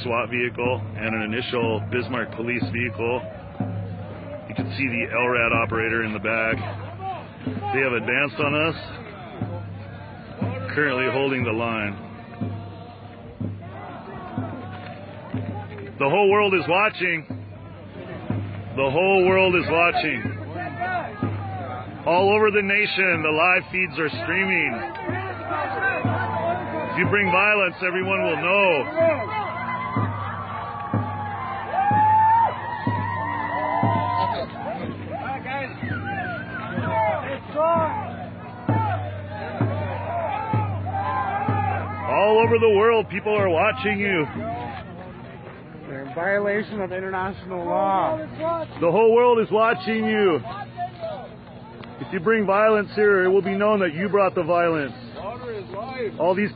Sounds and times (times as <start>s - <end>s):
Speech: 0.0s - 3.3s, 4.5s - 9.2s, 10.5s - 12.0s, 18.8s - 26.2s, 26.8s - 29.2s
Music: 0.0s - 56.5s.